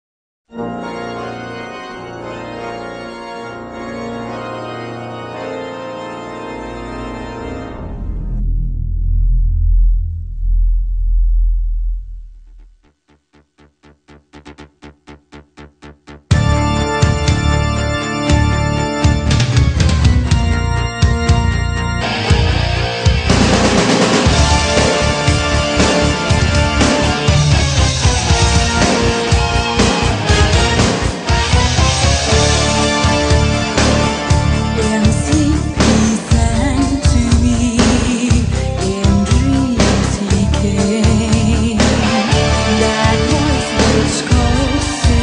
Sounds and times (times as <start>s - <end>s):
Organ: 0.5s - 8.2s, 16.3s - 40.6s.